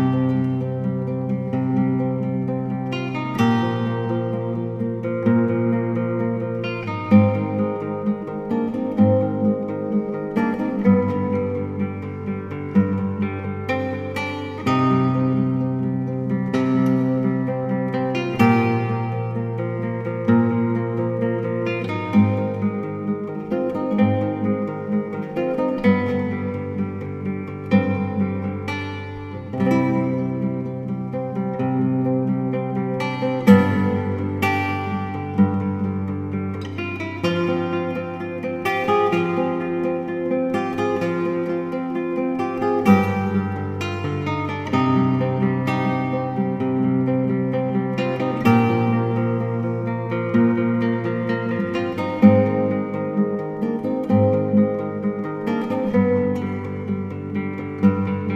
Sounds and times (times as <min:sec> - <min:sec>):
Acoustic guitar: 0:00.0 - 0:58.3.